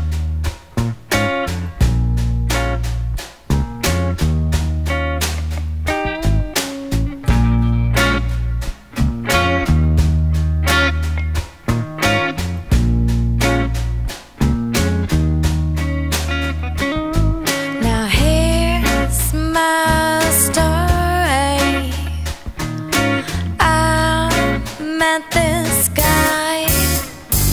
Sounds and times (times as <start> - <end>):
Music: 0.0 - 27.5.